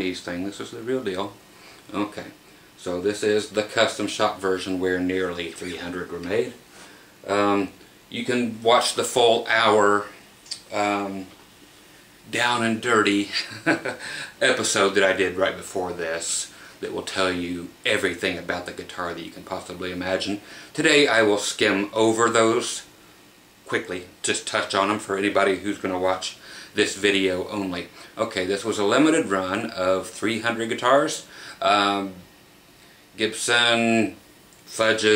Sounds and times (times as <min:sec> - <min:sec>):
Speech: 0:00.0 - 0:06.6, 0:07.2 - 0:11.4, 0:12.3 - 0:22.9, 0:23.7 - 0:32.3, 0:33.2 - 0:35.1.